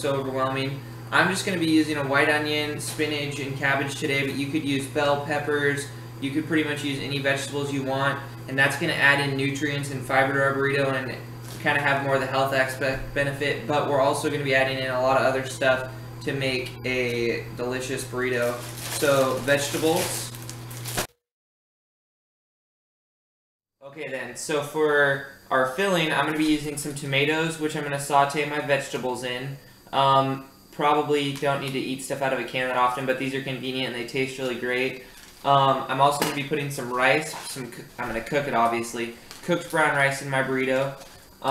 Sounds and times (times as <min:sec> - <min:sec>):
Speech: 0:00.0 - 0:20.3, 0:23.8 - 0:41.5.